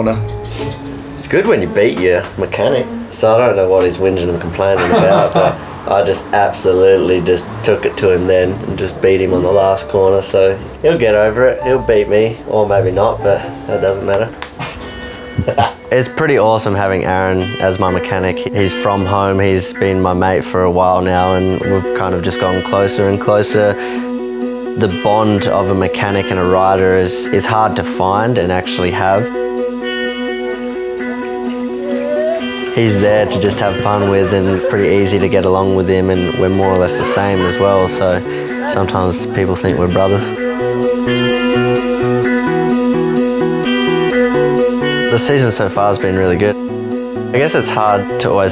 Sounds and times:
Music: 0.0s - 48.5s
Speech: 1.2s - 5.3s, 5.9s - 14.3s, 15.9s - 23.8s, 24.8s - 29.3s, 32.1s - 40.3s, 45.1s - 46.6s, 47.3s - 48.5s.

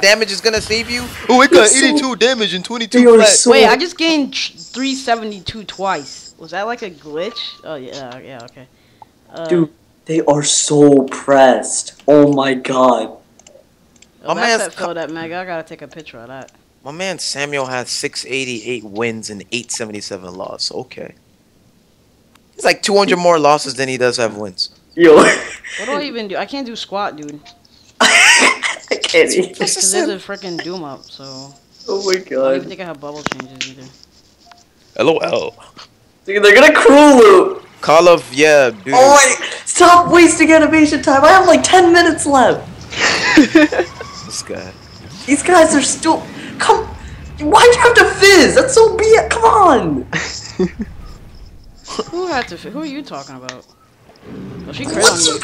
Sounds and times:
Speech: 0.0s - 6.3s, 14.3s - 21.1s, 51.9s - 53.6s, 54.7s - 55.4s.

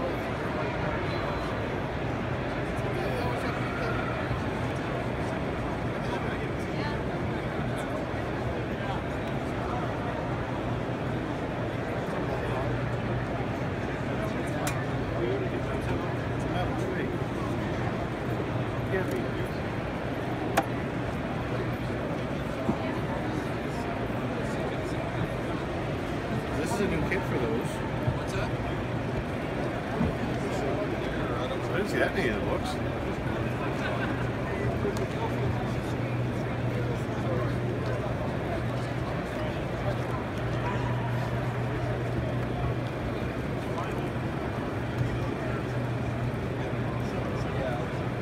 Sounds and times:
Speech: 0.0s - 48.2s.

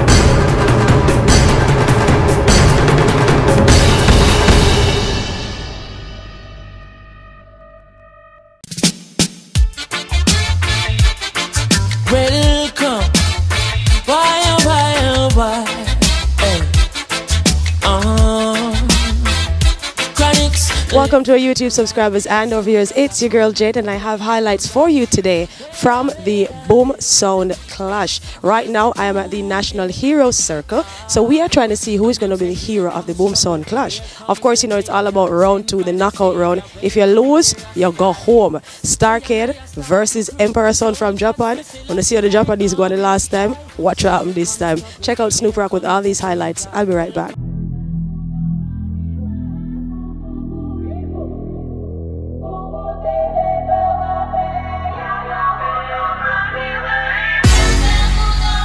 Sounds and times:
Hip hop music: 0.0s - 6.3s, 8.6s - 47.6s, 53.8s - 58.6s.

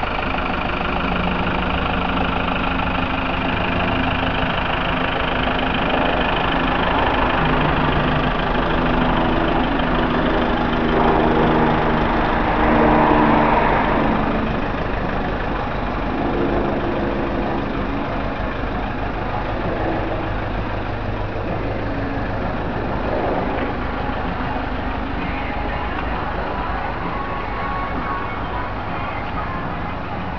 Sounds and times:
Outside, urban or manmade: 0.0s - 30.3s
Vehicle: 0.0s - 30.3s.

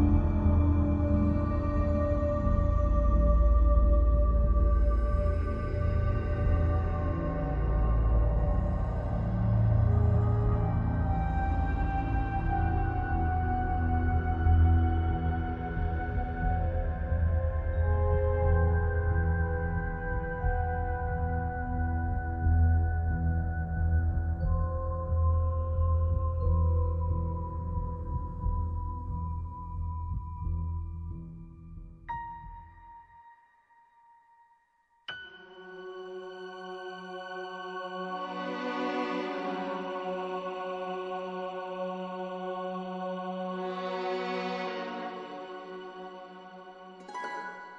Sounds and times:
Music: 0.0s - 47.7s.

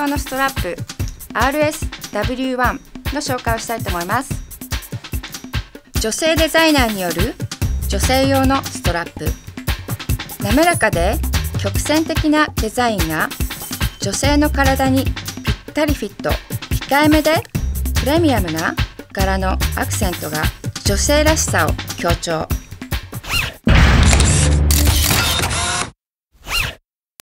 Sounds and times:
Speech: 0.0s - 4.4s, 6.0s - 9.4s, 10.4s - 13.4s, 14.0s - 15.1s, 15.7s - 22.6s
Music: 0.0s - 23.4s, 24.0s - 25.4s
Single-lens reflex camera: 24.0s - 25.9s.

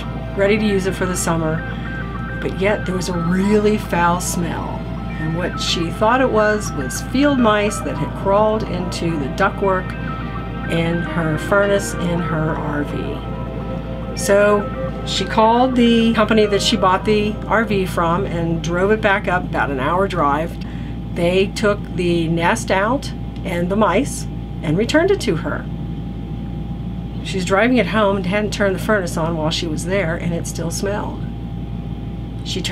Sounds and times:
Speech: 0.0s - 1.7s, 2.4s - 13.2s, 14.2s - 25.7s, 27.2s - 31.3s, 32.4s - 32.7s
Music: 0.0s - 20.6s.

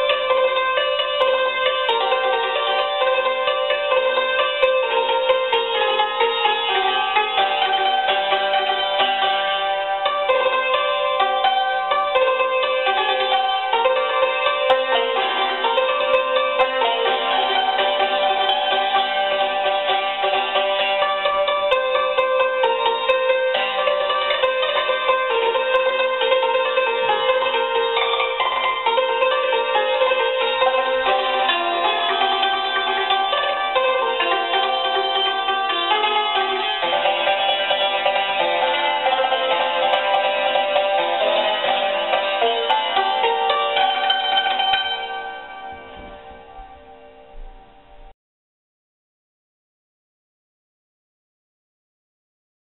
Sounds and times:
Inside, small room: 0.0s - 48.2s
Musical instrument: 0.0s - 48.2s.

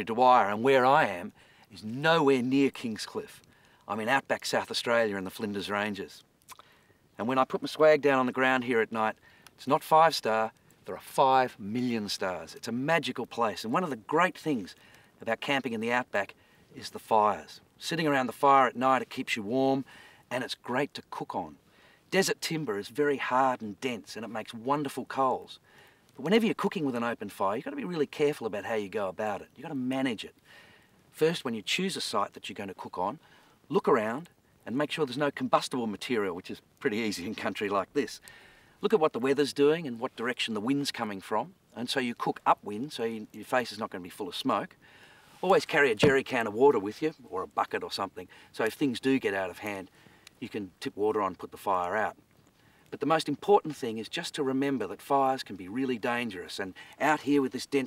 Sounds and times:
Speech: 0.0s - 6.2s, 7.2s - 25.6s, 26.2s - 30.4s, 31.1s - 38.2s, 38.8s - 44.7s, 45.4s - 52.2s, 52.9s - 57.8s.

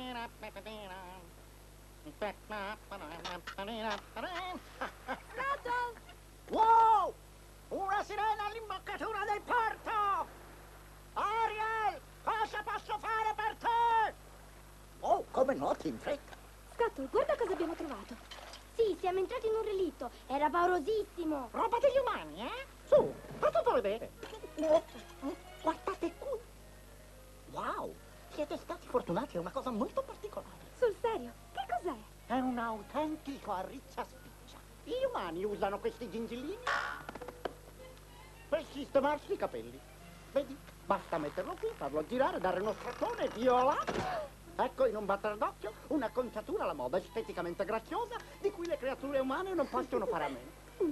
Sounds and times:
Speech: 5.3s - 10.3s, 11.2s - 14.2s, 18.8s - 26.4s, 40.4s - 50.9s.

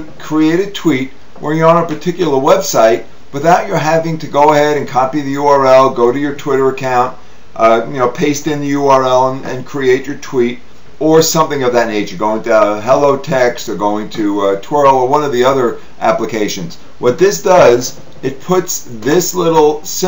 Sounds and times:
Speech: 0.0s - 20.0s.

